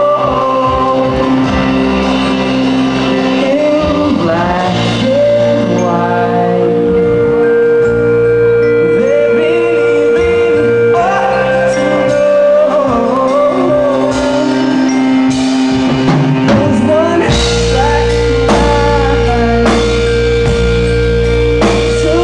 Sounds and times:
Music: 0.0 - 22.2.

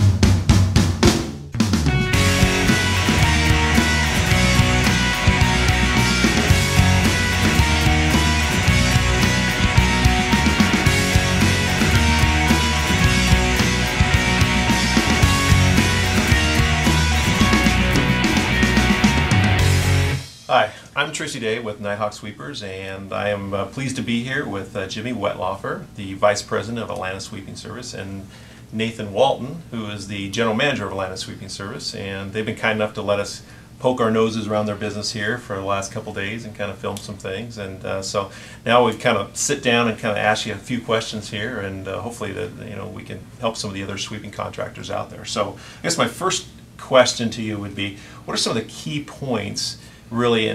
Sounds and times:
Speech: 20.5 - 50.5.

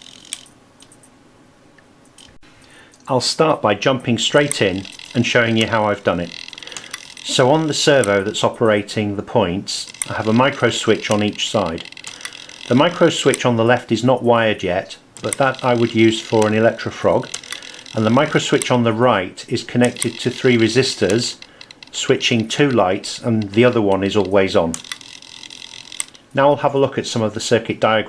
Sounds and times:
Speech: 3.1 - 6.4, 7.2 - 11.9, 12.7 - 17.3, 18.0 - 24.8, 26.4 - 28.0.

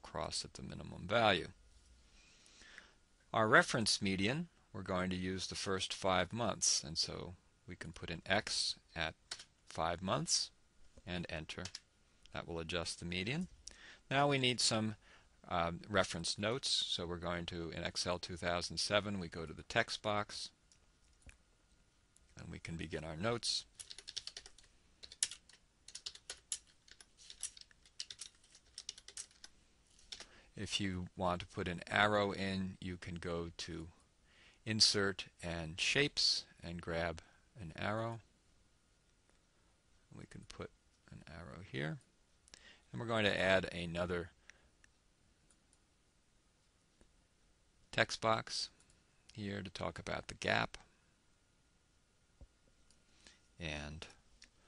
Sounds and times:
Speech: 0.0 - 1.6, 3.3 - 13.5, 14.1 - 20.6, 22.4 - 23.7, 30.6 - 34.0, 34.7 - 38.3, 40.1 - 42.1, 42.9 - 44.4, 47.9 - 50.9, 53.6 - 54.2
Computer keyboard: 11.6 - 11.8, 23.8 - 30.3.

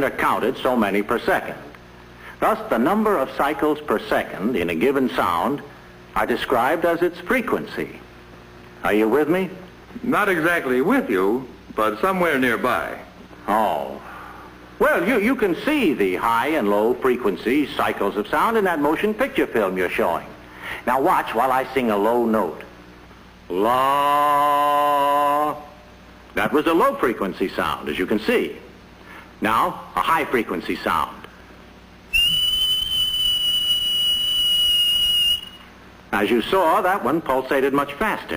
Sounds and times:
Whistle: 32.1 - 35.7.

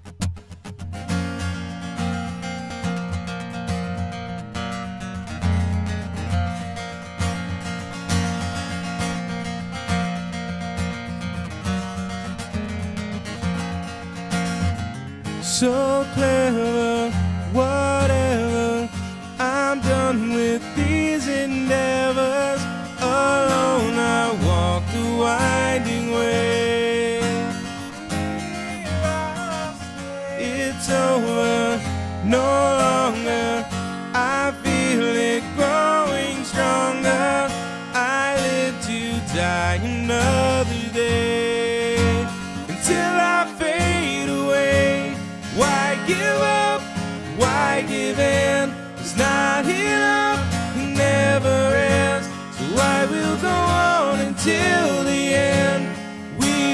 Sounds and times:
Acoustic guitar: 0.0 - 56.7
Bass guitar: 0.0 - 56.7
Electric guitar: 0.0 - 56.7.

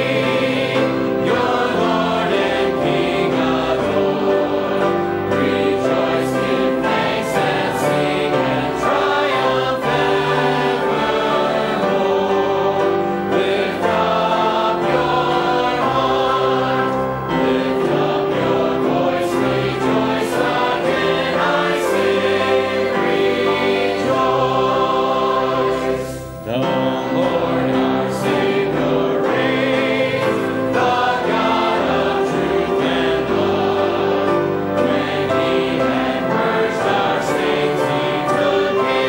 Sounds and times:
Choir: 0.0 - 39.0.

